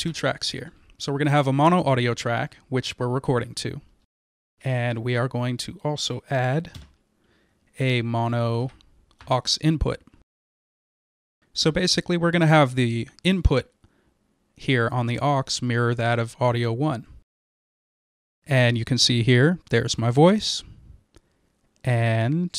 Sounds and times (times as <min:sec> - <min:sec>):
Speech: 0:00.0 - 0:03.9, 0:04.6 - 0:06.8, 0:07.8 - 0:10.1, 0:11.6 - 0:13.7, 0:14.6 - 0:17.2, 0:18.5 - 0:20.7, 0:21.8 - 0:22.5.